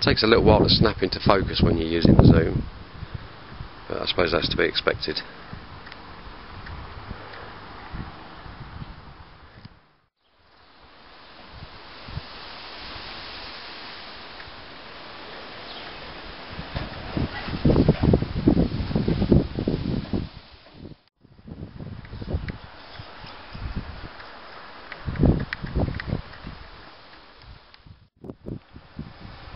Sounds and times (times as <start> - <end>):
Speech: 0.0 - 2.6, 3.9 - 5.3.